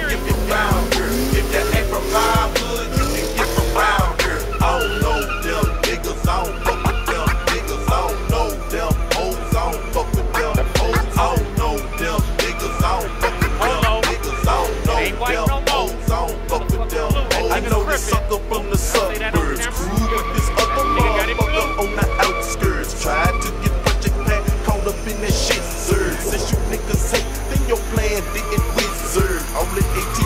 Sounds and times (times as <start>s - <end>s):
Music: 0.0s - 30.2s
Speech: 14.9s - 15.9s, 16.7s - 22.5s.